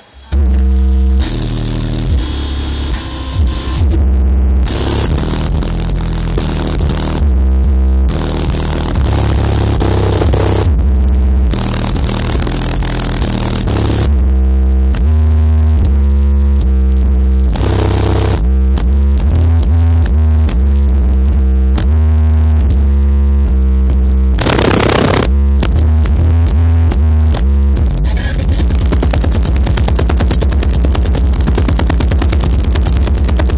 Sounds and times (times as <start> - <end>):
Electronic music: 24.4 - 25.5, 28.0 - 33.5.